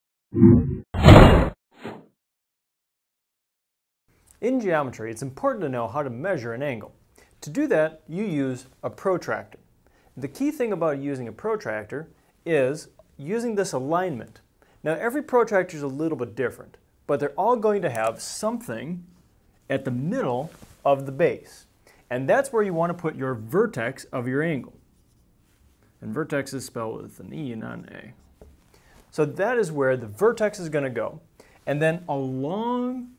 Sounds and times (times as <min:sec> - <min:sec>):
Inside, small room: 0:04.1 - 0:33.1
Speech: 0:04.4 - 0:09.6, 0:10.2 - 0:19.1, 0:19.7 - 0:24.8, 0:26.0 - 0:28.2, 0:29.1 - 0:33.1.